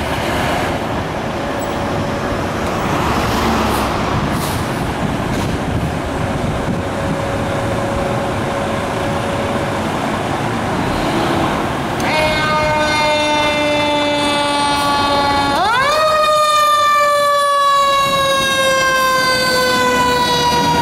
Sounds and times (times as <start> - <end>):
Outside, urban or manmade: 0.0 - 20.8
Truck: 0.0 - 20.8
Fire engine, fire truck (siren): 12.0 - 20.8.